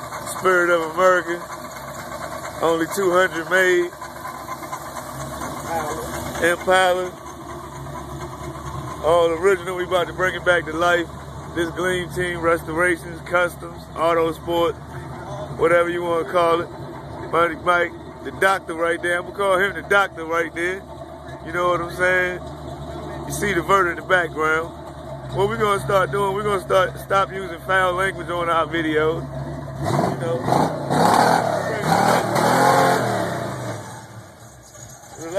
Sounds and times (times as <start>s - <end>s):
Car: 0.0s - 35.3s
Speech: 0.3s - 1.5s, 2.6s - 4.0s, 5.7s - 7.2s, 9.0s - 16.7s, 17.3s - 20.8s, 21.4s - 22.4s, 23.0s - 24.7s, 25.3s - 29.2s, 30.1s - 30.5s, 31.6s - 32.0s, 35.2s - 35.3s.